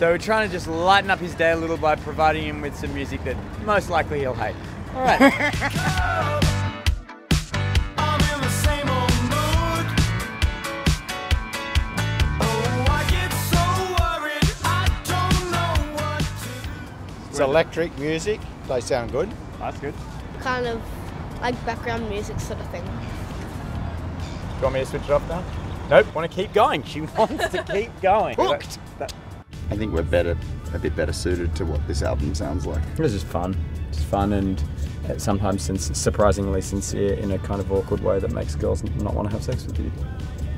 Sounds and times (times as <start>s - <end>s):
Music: 0.0s - 40.5s.